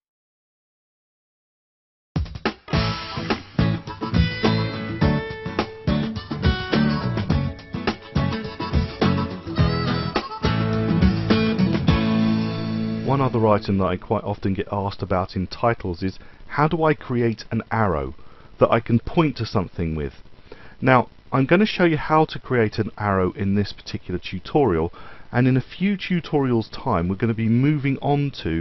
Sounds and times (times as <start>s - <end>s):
Speech: 13.0s - 20.2s, 20.8s - 28.6s.